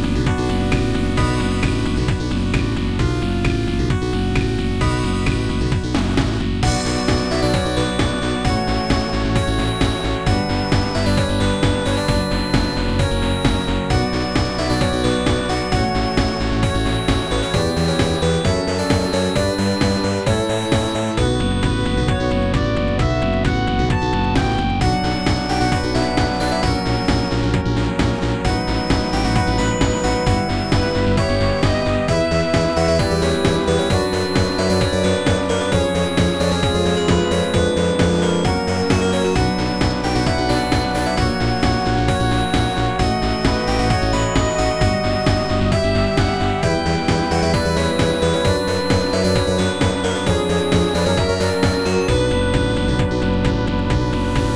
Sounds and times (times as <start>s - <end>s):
Music: 0.0s - 54.5s.